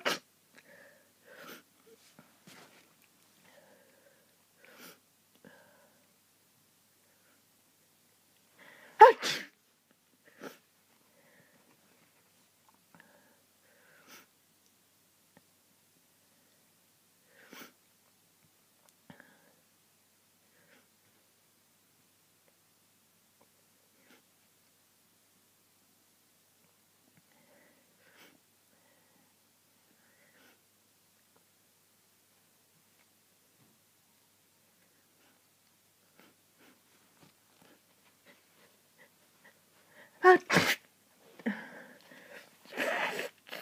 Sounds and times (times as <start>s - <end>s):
Sneeze: 0.0s - 0.3s, 9.0s - 9.6s, 40.2s - 40.9s, 42.7s - 43.6s.